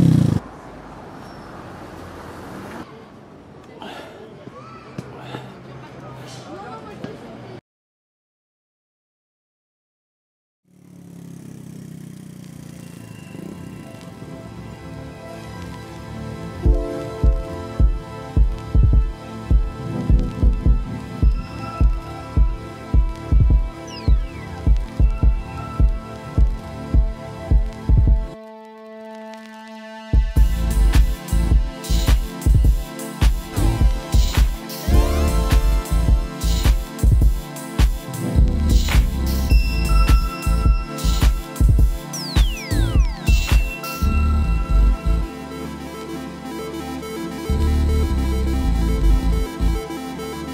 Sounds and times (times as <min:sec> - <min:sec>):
Music: 0:13.8 - 0:50.5.